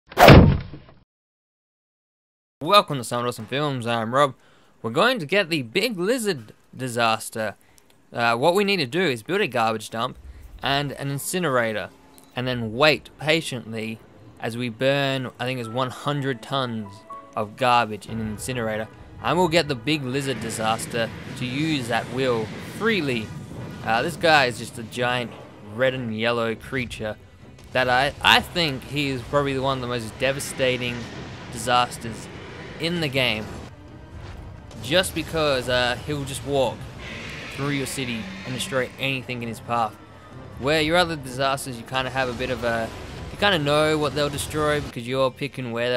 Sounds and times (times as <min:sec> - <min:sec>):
Whack, thwack: 0:00.1 - 0:00.8.